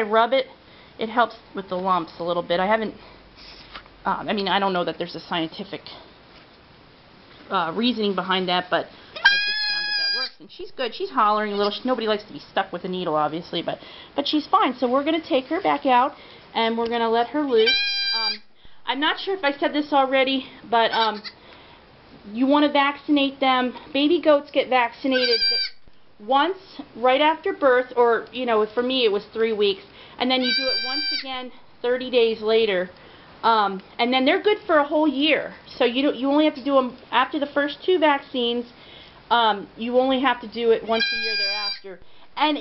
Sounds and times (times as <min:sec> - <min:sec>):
Speech: 0:00.0 - 0:03.0, 0:04.0 - 0:06.1, 0:07.5 - 0:21.3, 0:22.2 - 0:25.6, 0:26.2 - 0:38.7, 0:39.3 - 0:42.6
Goat: 0:09.2 - 0:10.4, 0:17.6 - 0:18.4, 0:25.2 - 0:25.7, 0:30.4 - 0:31.3, 0:40.9 - 0:41.8.